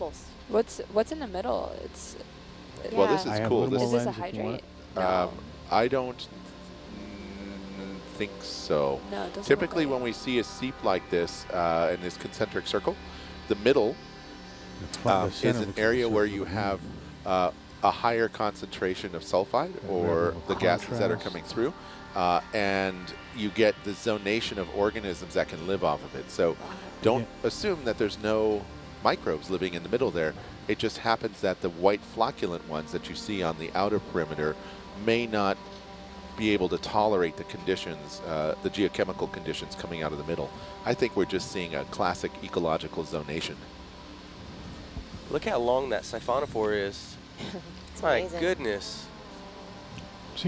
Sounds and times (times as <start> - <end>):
Speech: 0.0 - 2.2, 2.8 - 6.3, 6.9 - 14.0, 14.8 - 35.6, 36.4 - 43.6, 45.3 - 49.1
Music: 0.0 - 50.4.